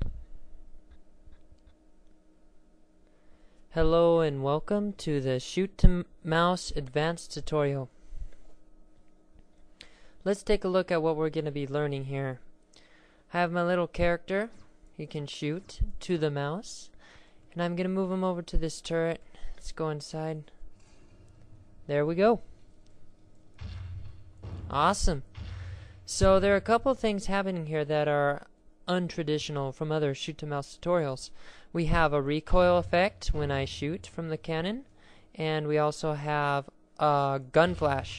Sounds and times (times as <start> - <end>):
Speech: 3.7 - 7.9, 10.2 - 12.5, 13.3 - 17.0, 17.6 - 20.6, 21.9 - 22.5, 24.7 - 25.3, 26.1 - 38.1.